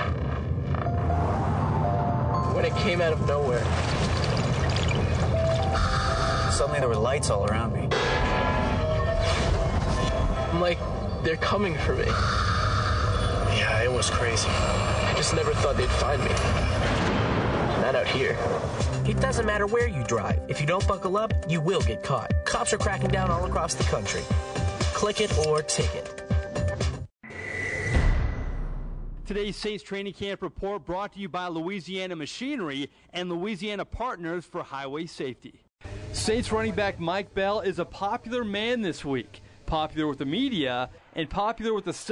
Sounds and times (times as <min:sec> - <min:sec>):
Music: 0:00.7 - 0:03.8, 0:04.9 - 0:12.1, 0:17.9 - 0:27.1
Speech: 0:17.8 - 0:24.3, 0:25.0 - 0:26.1, 0:29.3 - 0:35.6, 0:36.2 - 0:42.1.